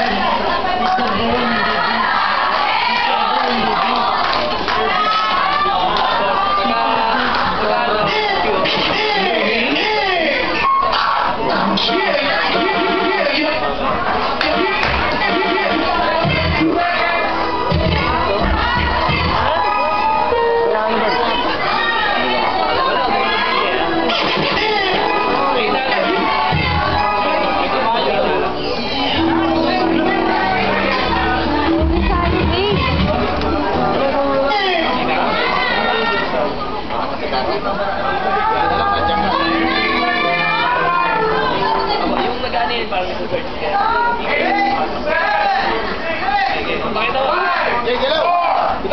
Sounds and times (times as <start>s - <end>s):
Speech: 0.0s - 48.9s
Music: 14.5s - 21.8s, 23.5s - 34.5s, 38.4s - 42.8s.